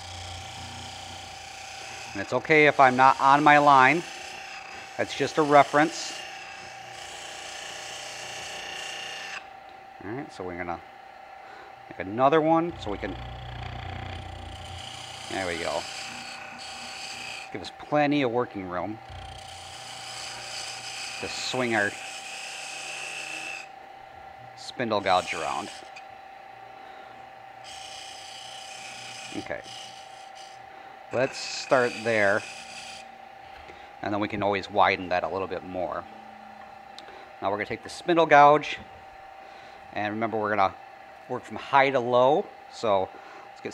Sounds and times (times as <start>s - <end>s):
Speech: 2.2s - 4.0s, 5.0s - 6.2s, 10.0s - 10.8s, 11.9s - 13.2s, 15.3s - 15.8s, 17.6s - 19.0s, 21.2s - 22.0s, 24.6s - 25.7s, 29.4s - 29.7s, 31.2s - 32.4s, 34.0s - 36.0s, 37.4s - 38.8s, 40.0s - 43.7s.